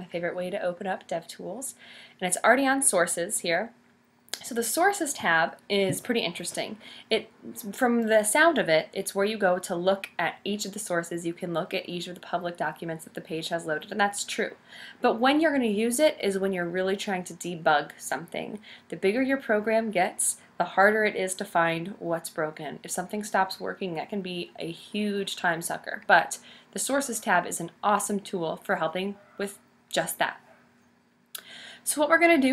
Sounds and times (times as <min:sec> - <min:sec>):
Speech: 0:00.0 - 0:03.7, 0:04.4 - 0:30.4, 0:31.9 - 0:32.5.